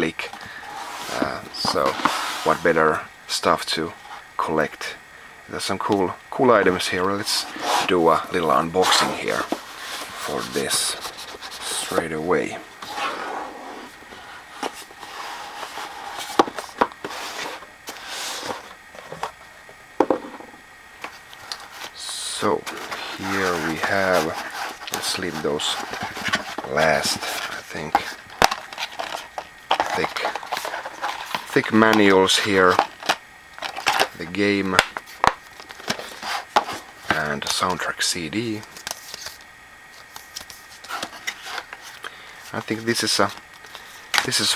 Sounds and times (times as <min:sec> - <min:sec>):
Speech: 0:00.0 - 0:00.4, 0:01.1 - 0:09.5, 0:10.2 - 0:11.0, 0:11.6 - 0:12.7, 0:22.0 - 0:25.9, 0:26.6 - 0:28.2, 0:29.8 - 0:30.4, 0:31.5 - 0:32.9, 0:34.1 - 0:34.9, 0:37.1 - 0:38.7, 0:42.5 - 0:43.4, 0:44.2 - 0:44.5.